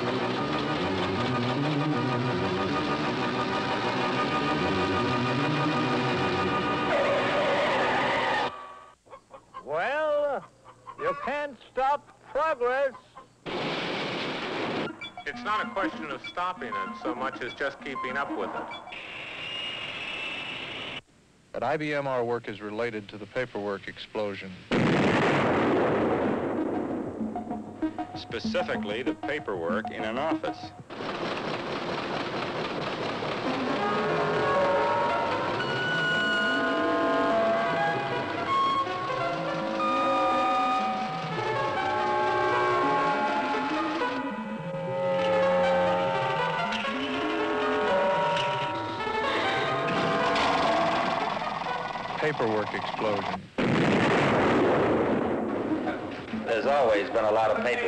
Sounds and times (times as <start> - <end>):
Music: 0.0 - 8.5, 14.9 - 18.9, 26.5 - 30.9, 33.5 - 53.2, 55.7 - 57.8
Speech: 15.3 - 18.5, 21.6 - 24.6, 28.2 - 30.7, 52.2 - 53.4, 56.5 - 57.8.